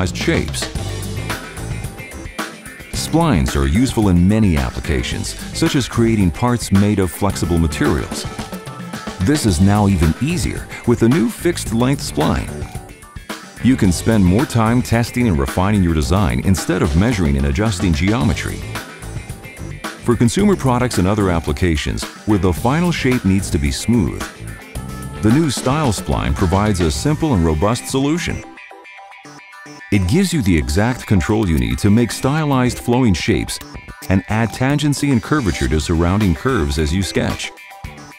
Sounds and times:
Speech: 0:00.0 - 0:00.8, 0:03.0 - 0:08.4, 0:09.2 - 0:12.6, 0:13.6 - 0:18.8, 0:20.0 - 0:24.4, 0:25.2 - 0:28.5, 0:29.9 - 0:37.5
Music: 0:00.0 - 0:38.1.

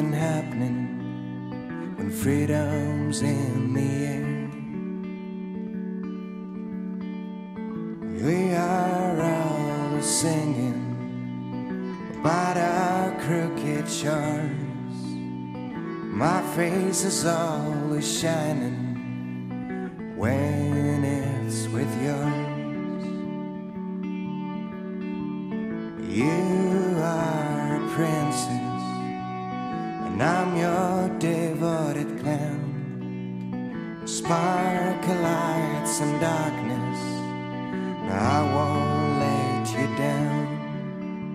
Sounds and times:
Independent music: 0:00.0 - 0:41.3.

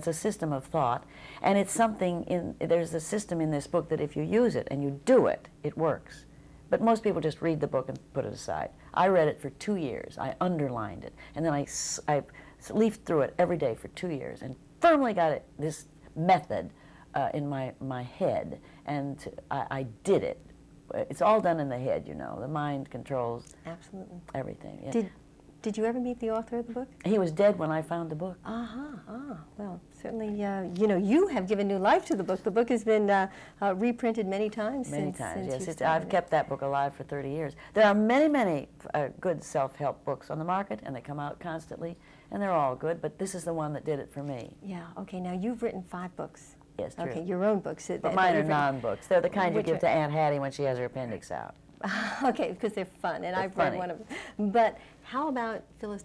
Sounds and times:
Inside, small room: 0:00.0 - 0:56.0.

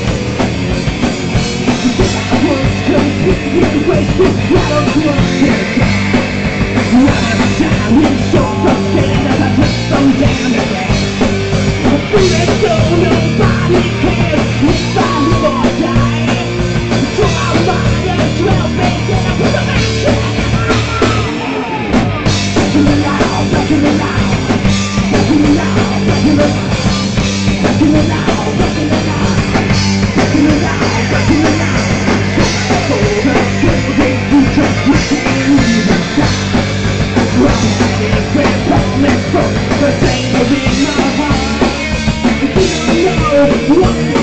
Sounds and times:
Music: 0:00.0 - 0:44.2.

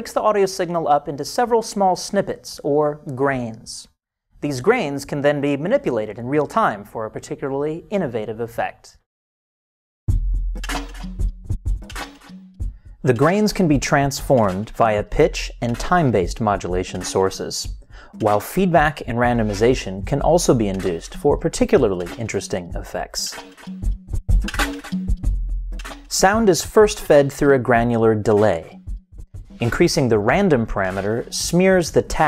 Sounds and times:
Speech: 0:00.0 - 0:09.0, 0:13.1 - 0:23.4, 0:26.1 - 0:28.8, 0:29.6 - 0:32.2
Music: 0:10.1 - 0:32.2.

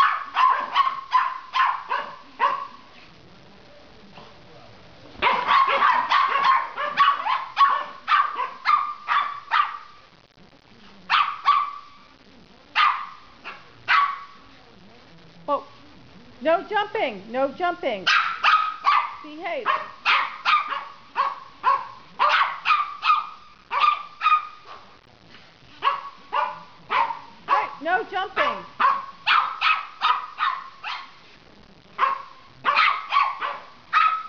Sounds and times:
Bark: 0:00.0 - 0:02.9, 0:05.2 - 0:10.0, 0:11.1 - 0:11.9, 0:12.8 - 0:14.4, 0:18.1 - 0:24.9, 0:25.8 - 0:27.8, 0:28.4 - 0:31.2, 0:32.0 - 0:34.2
Speech: 0:11.9 - 0:18.1, 0:19.2 - 0:20.0, 0:26.6 - 0:28.8.

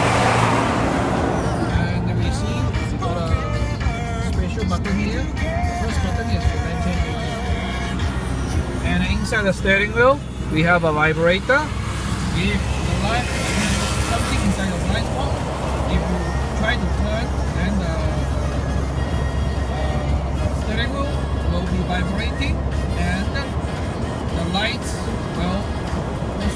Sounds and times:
Motor vehicle (road): 0:00.0 - 0:26.5.

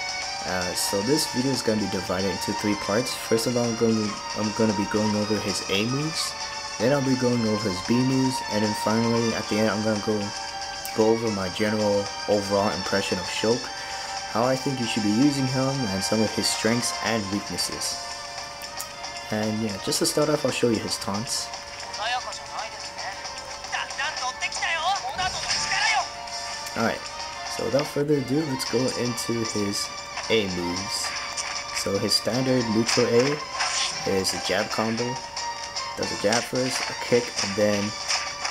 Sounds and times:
Music: 0:00.0 - 0:38.5
Speech: 0:19.3 - 0:22.7, 0:23.8 - 0:26.0, 0:27.6 - 0:31.0, 0:31.8 - 0:33.4, 0:34.0 - 0:35.2, 0:36.0 - 0:37.9.

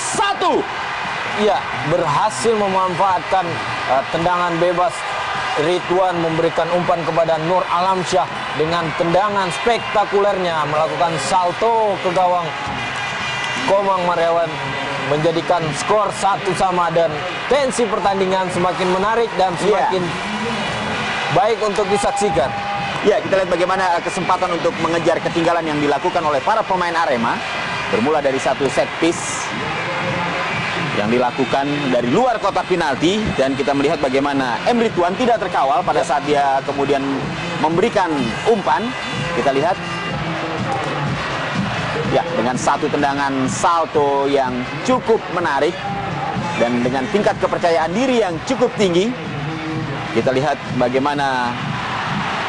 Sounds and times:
Speech: 0:01.4 - 0:05.0, 0:05.6 - 0:12.5, 0:13.7 - 0:20.1, 0:21.3 - 0:29.5, 0:30.9 - 0:39.8, 0:42.1 - 0:45.8, 0:46.6 - 0:49.2, 0:50.2 - 0:51.6.

